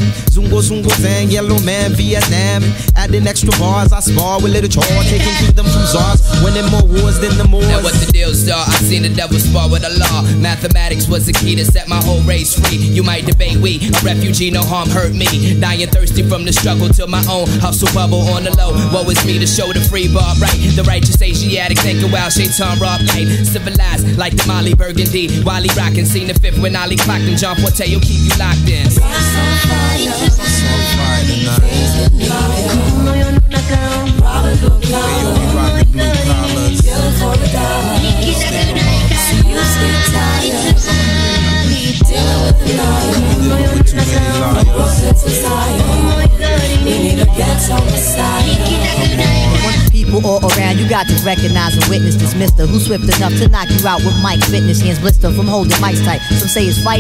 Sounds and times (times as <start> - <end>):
Hip hop music: 0.0 - 57.0.